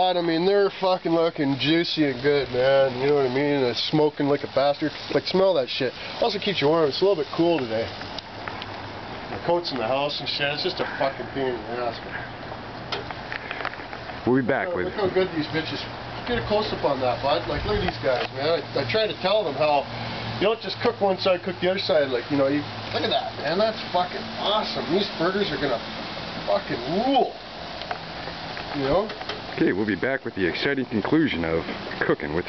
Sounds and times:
Speech: 0.0s - 7.9s, 9.4s - 12.2s, 14.2s - 25.8s, 26.5s - 27.4s, 28.7s - 32.4s.

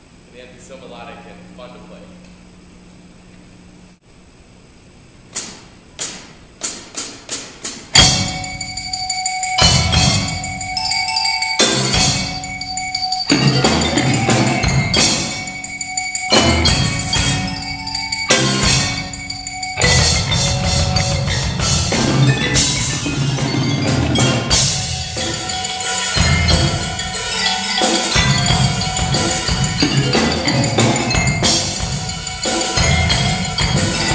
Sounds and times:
Drum kit: 5.3s - 34.1s
Glockenspiel: 8.0s - 34.1s
Marimba, xylophone: 8.0s - 34.1s.

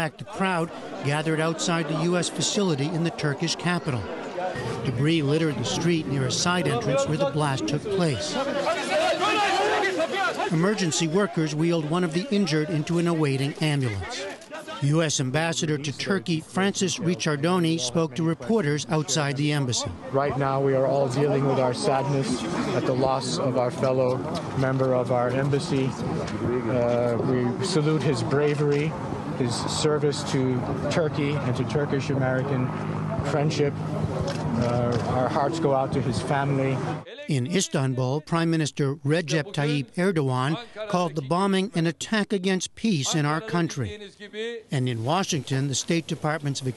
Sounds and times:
Speech: 0.0s - 4.1s, 4.8s - 33.8s, 34.6s - 46.7s.

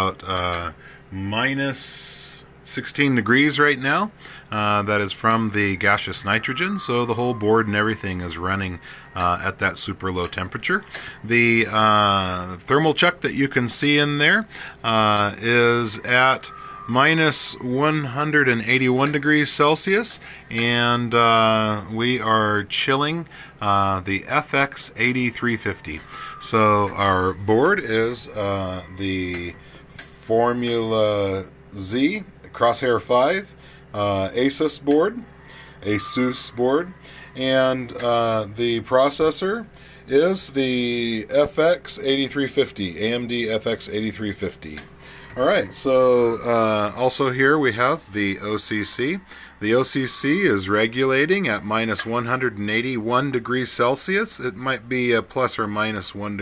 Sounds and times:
Speech: 0.0s - 56.4s.

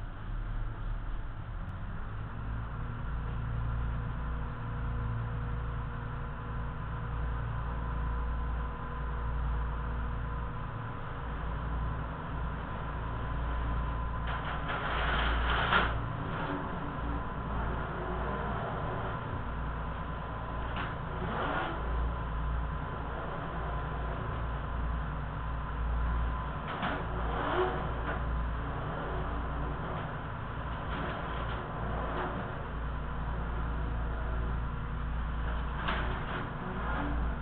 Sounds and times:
Vehicle: 0.0s - 37.4s.

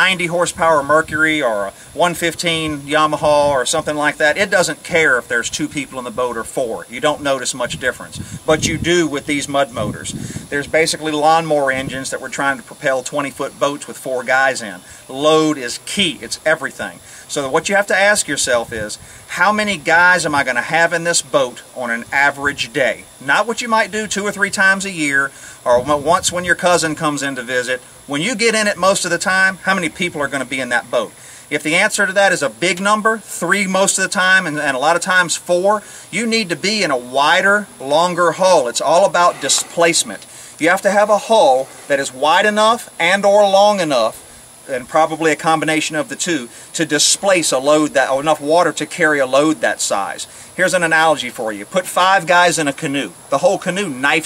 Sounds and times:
Speech: 0.0s - 54.2s.

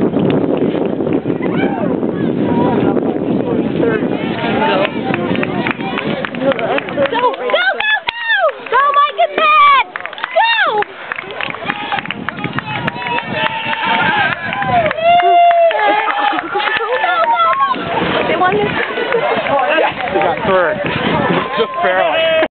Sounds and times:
Wind noise (microphone): 0.0s - 8.5s, 10.4s - 22.5s.

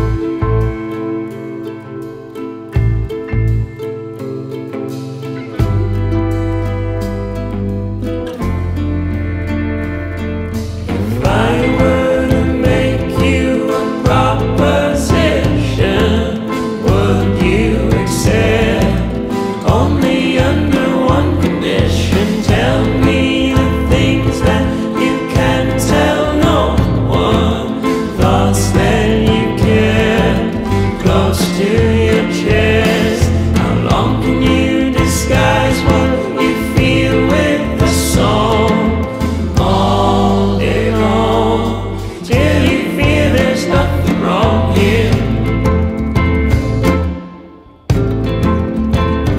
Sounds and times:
Music: 0.0s - 49.3s.

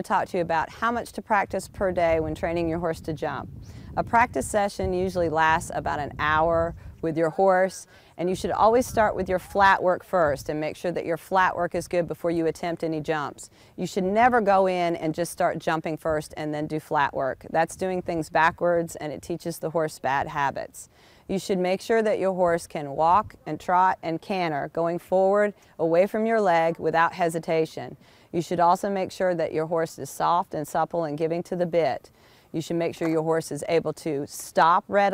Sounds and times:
Speech: 0.0s - 35.1s.

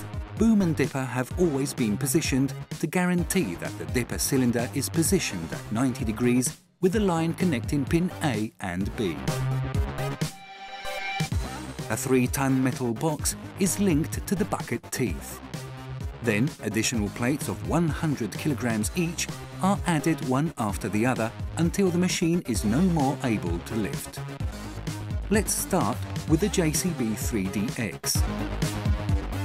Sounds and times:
Music: 0.0s - 29.4s
Speech: 0.4s - 9.3s, 11.9s - 15.4s, 16.2s - 24.2s, 25.3s - 28.2s.

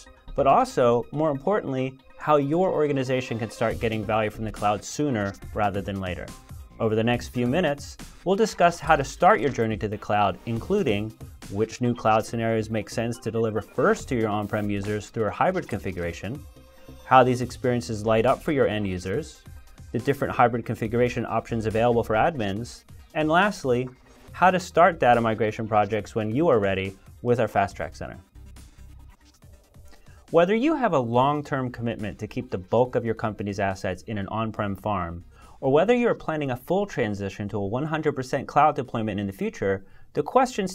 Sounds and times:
Speech: 0.0s - 16.4s, 17.1s - 19.4s, 20.0s - 28.2s, 30.3s - 40.7s
Music: 0.0s - 40.7s.

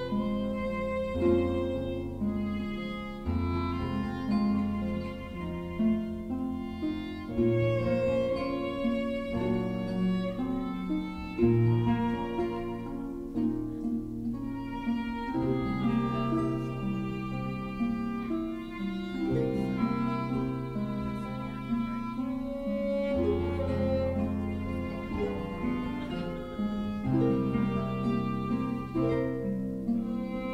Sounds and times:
Music: 0.0s - 30.5s.

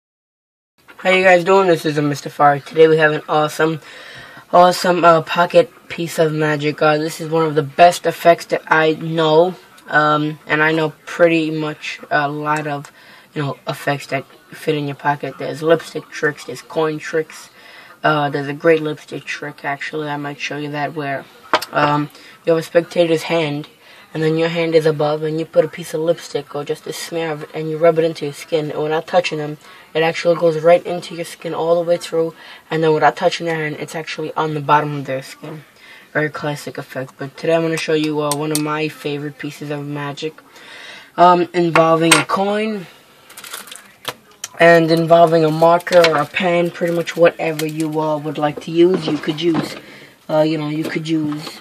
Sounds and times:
Inside, small room: 0.8s - 51.6s
Speech: 1.0s - 3.9s, 4.5s - 40.5s, 41.1s - 51.6s.

